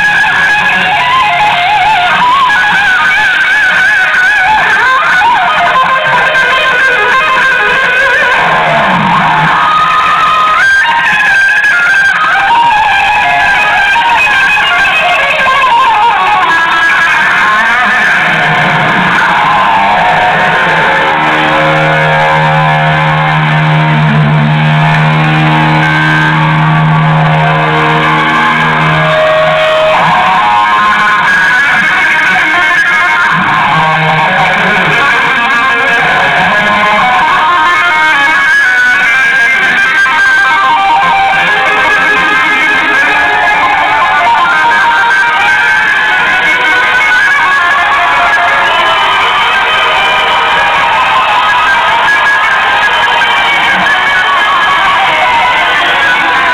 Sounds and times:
Music: 0.0 - 56.5.

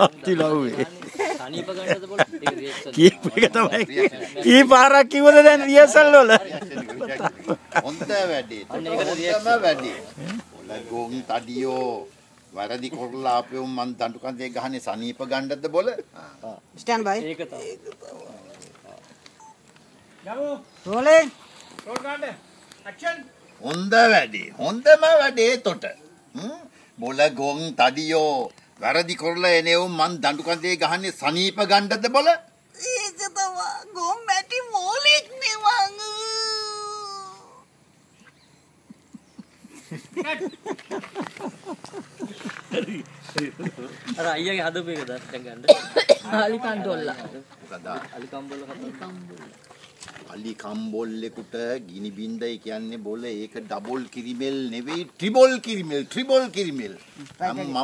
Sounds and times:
Outside, rural or natural: 0.0 - 57.8.

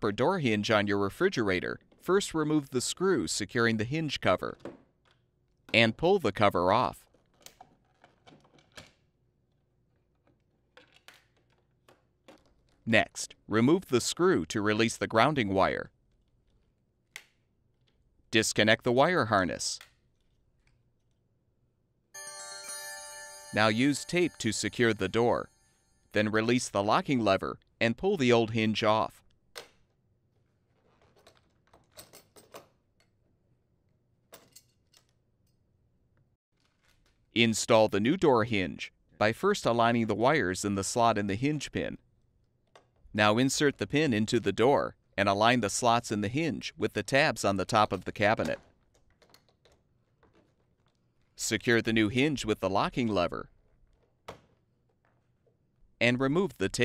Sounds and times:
Speech: 0.0 - 4.6, 5.7 - 7.1, 12.9 - 15.9, 18.3 - 19.9, 23.5 - 25.5, 26.2 - 29.2, 37.4 - 42.0, 43.2 - 48.6, 51.4 - 53.5, 56.0 - 56.8.

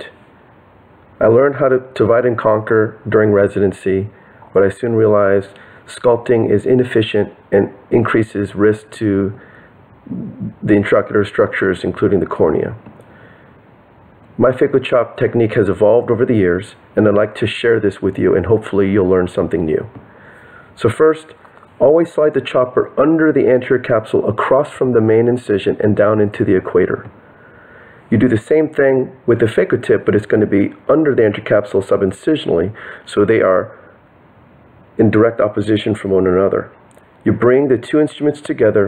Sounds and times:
Speech: 0.0 - 0.2, 1.2 - 9.4, 10.0 - 12.9, 14.4 - 20.0, 20.8 - 27.2, 28.1 - 33.9, 35.0 - 38.8.

